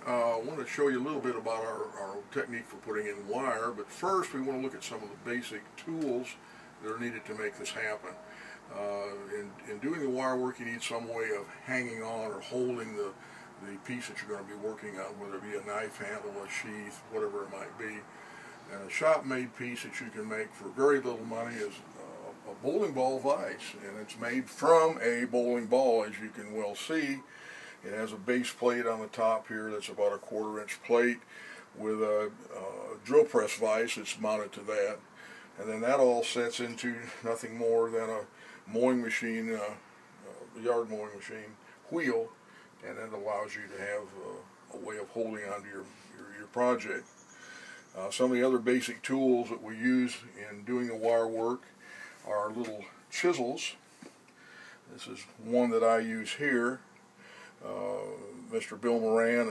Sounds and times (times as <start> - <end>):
Speech: 0.0 - 47.0, 48.0 - 51.6, 52.2 - 53.8, 54.9 - 56.9, 57.6 - 59.5.